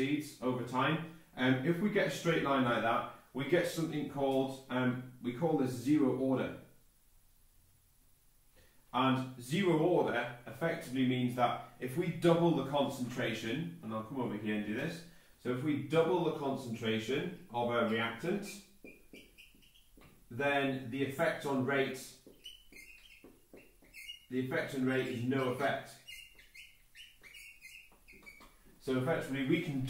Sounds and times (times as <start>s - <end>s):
Speech: 0.0s - 6.6s, 9.0s - 18.7s, 20.3s - 22.2s, 24.3s - 26.0s, 28.8s - 29.9s
Inside, small room: 0.0s - 29.9s.